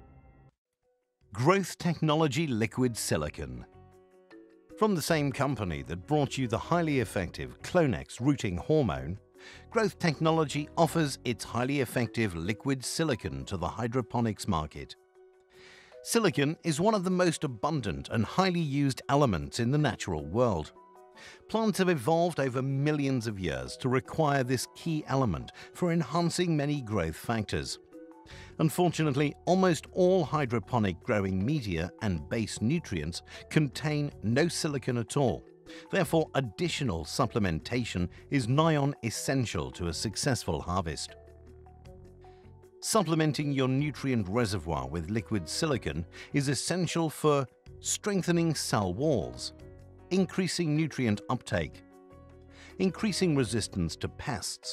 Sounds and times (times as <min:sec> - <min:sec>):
Speech: 0:01.4 - 0:03.7, 0:04.8 - 0:15.0, 0:16.1 - 0:20.7, 0:21.5 - 0:27.8, 0:28.6 - 0:41.2, 0:42.8 - 0:49.5, 0:50.1 - 0:51.8, 0:52.8 - 0:54.7.